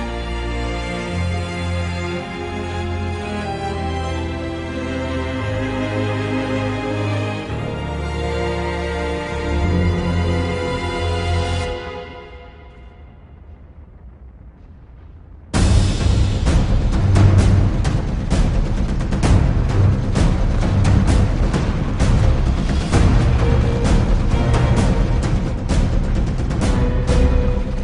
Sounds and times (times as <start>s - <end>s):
Scary music: 0.0s - 27.8s.